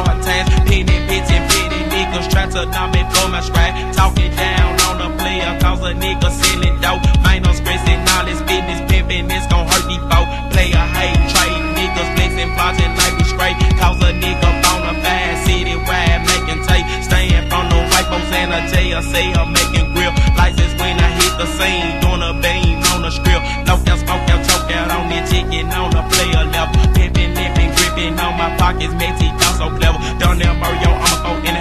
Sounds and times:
Music: 0.0 - 31.6.

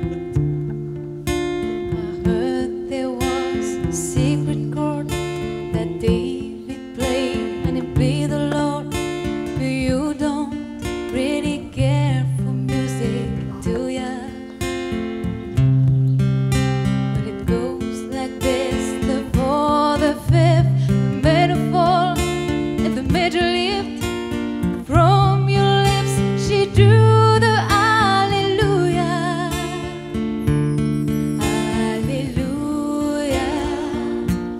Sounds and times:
Music: 0.0 - 34.5.

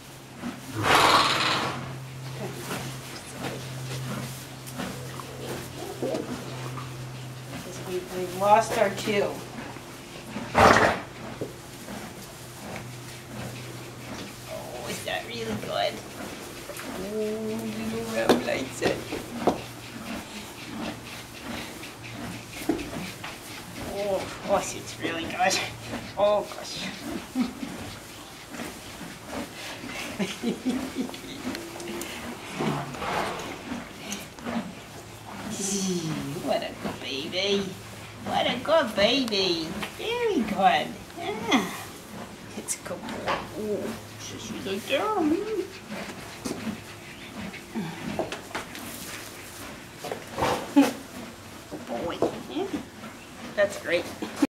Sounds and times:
Speech: 17.0 - 19.0, 35.5 - 41.8, 42.6 - 45.7, 51.9 - 52.8, 53.6 - 54.1.

